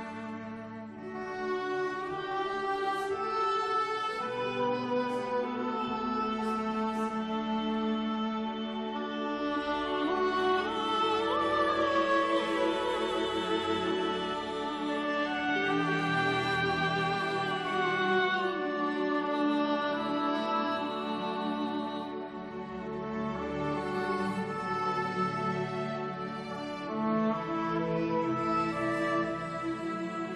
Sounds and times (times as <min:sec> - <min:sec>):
Violin, fiddle: 0:00.0 - 0:30.3.